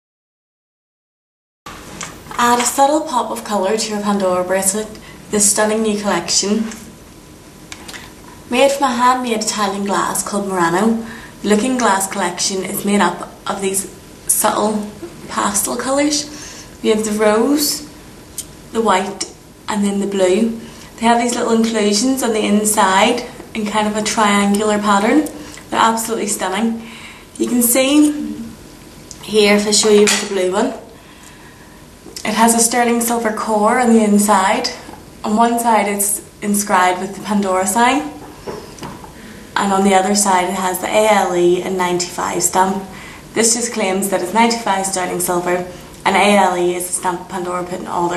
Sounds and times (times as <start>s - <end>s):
Speech: 2.4s - 6.9s, 8.5s - 17.9s, 18.8s - 26.8s, 27.4s - 28.6s, 29.2s - 30.9s, 32.2s - 38.2s, 39.6s - 48.1s.